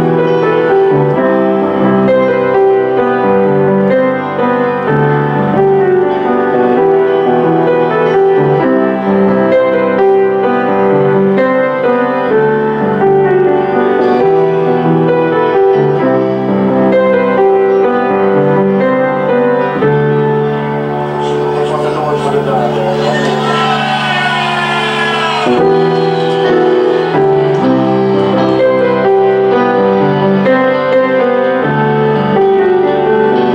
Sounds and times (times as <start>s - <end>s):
Music: 0.0s - 33.5s
Speech: 21.1s - 27.0s.